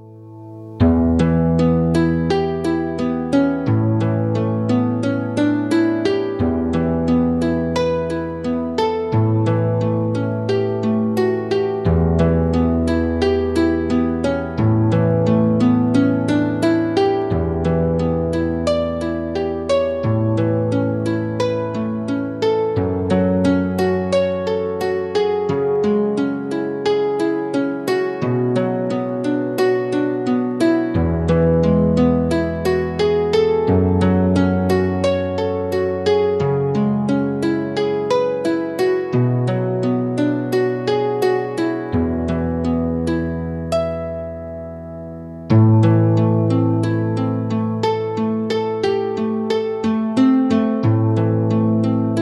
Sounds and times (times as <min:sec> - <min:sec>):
Harp: 0:00.0 - 0:52.2.